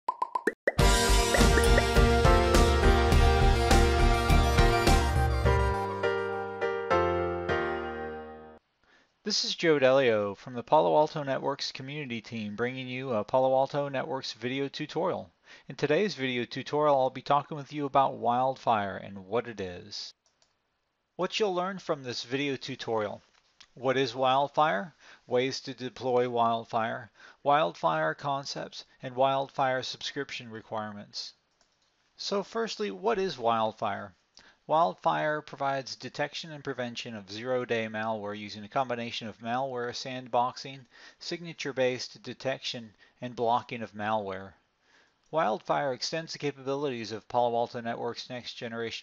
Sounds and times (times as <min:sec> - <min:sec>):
Plop: 0:00.1 - 0:01.9
Music: 0:00.8 - 0:08.6
Speech: 0:09.2 - 0:20.2, 0:21.2 - 0:23.2, 0:23.8 - 0:31.4, 0:32.2 - 0:44.6, 0:45.3 - 0:49.0.